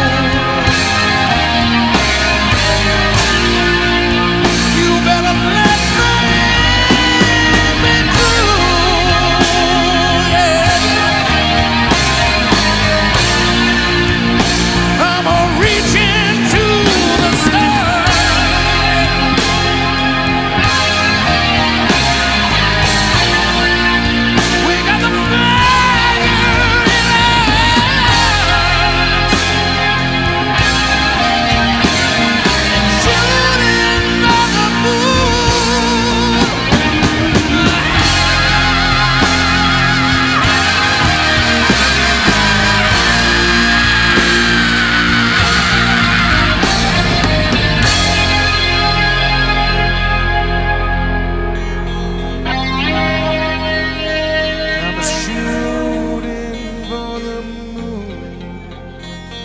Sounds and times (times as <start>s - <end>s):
Guitar: 0.0s - 59.4s.